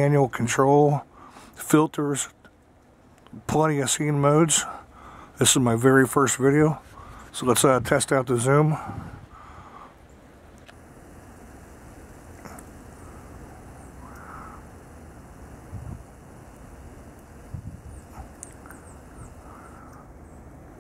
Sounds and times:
Speech: 0.0s - 2.4s, 3.3s - 4.8s, 5.4s - 9.0s.

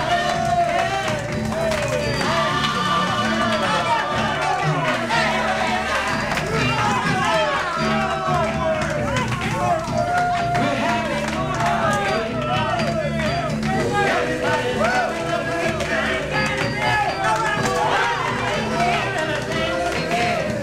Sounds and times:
Music: 0.0s - 20.6s.

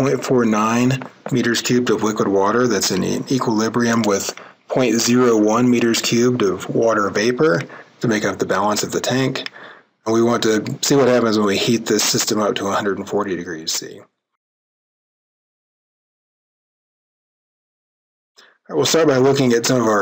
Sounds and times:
Speech: 0.0s - 14.1s, 18.4s - 20.0s.

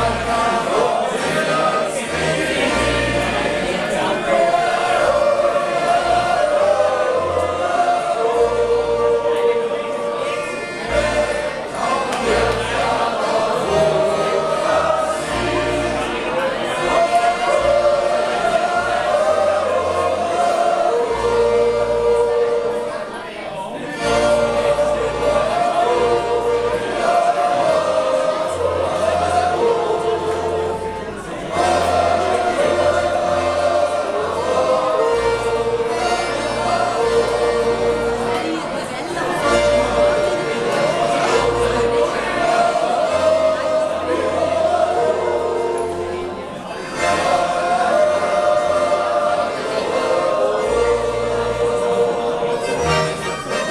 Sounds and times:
Speech: 0.0s - 21.1s, 21.8s - 51.0s
Music: 0.0s - 53.7s.

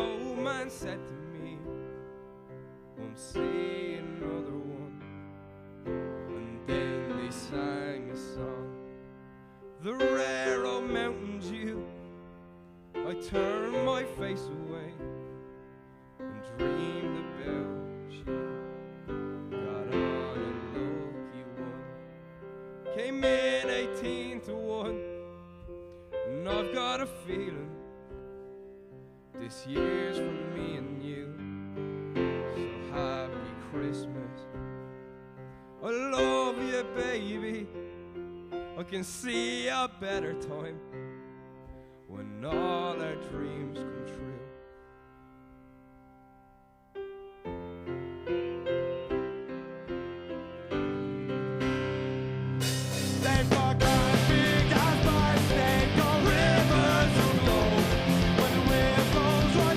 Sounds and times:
Music: 0.0s - 59.7s.

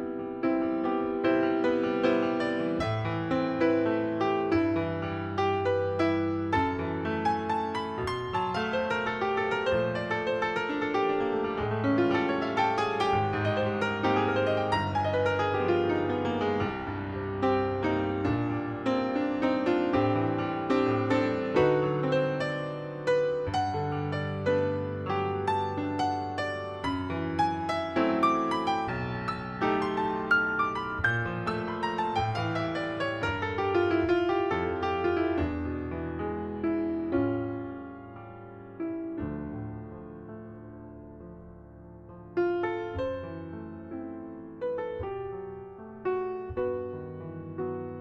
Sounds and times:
Piano: 0.0s - 48.0s.

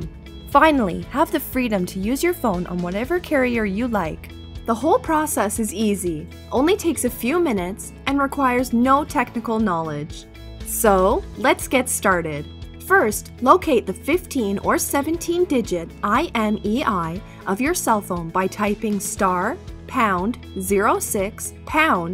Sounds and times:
Music: 0.0s - 22.1s
Speech: 0.0s - 22.1s.

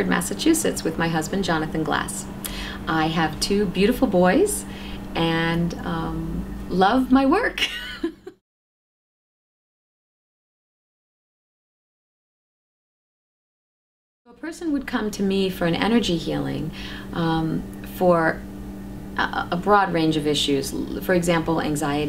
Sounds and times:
Speech: 0.0s - 7.7s, 14.3s - 18.4s, 19.2s - 22.0s.

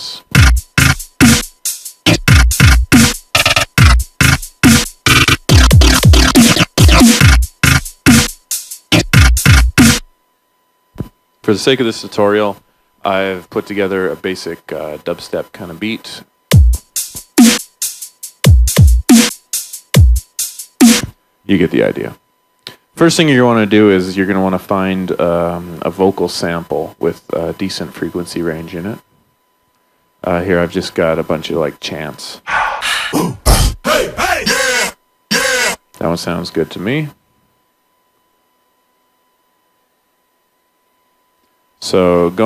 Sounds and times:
Speech: 0.0s - 0.3s, 11.4s - 16.3s, 21.5s - 22.2s, 23.0s - 29.1s, 30.2s - 32.6s, 33.2s - 37.2s, 41.8s - 42.4s
Dubstep: 0.3s - 10.0s, 16.6s - 21.1s, 32.8s - 35.8s.

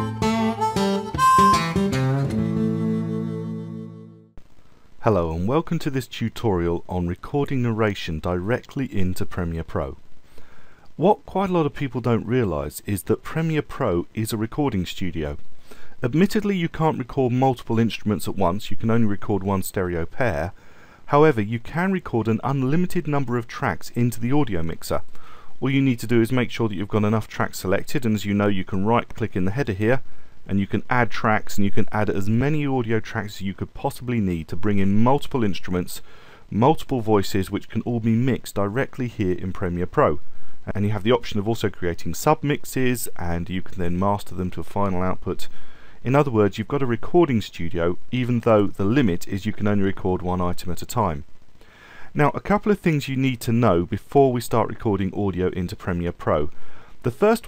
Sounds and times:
Narration, monologue: 4.5s - 57.4s.

